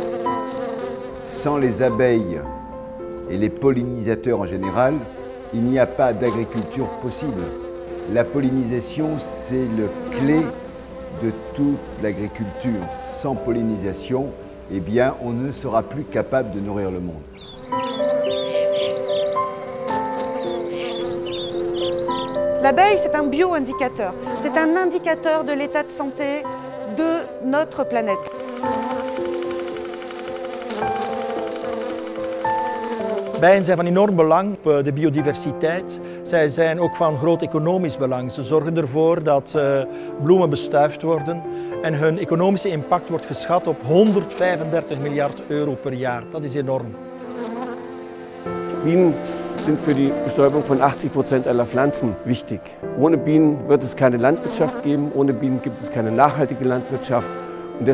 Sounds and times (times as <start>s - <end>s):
Insect: 28.2s - 33.8s.